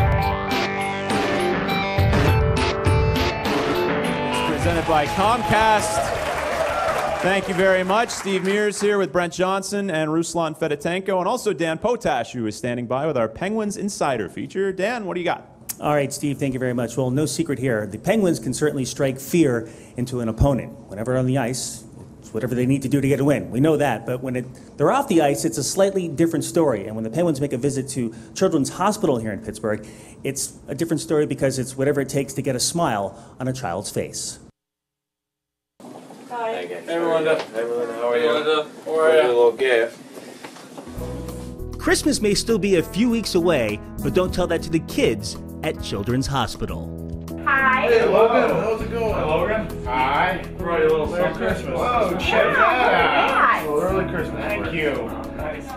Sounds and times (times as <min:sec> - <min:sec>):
Speech: 0:07.2 - 0:34.5, 0:41.8 - 0:46.9.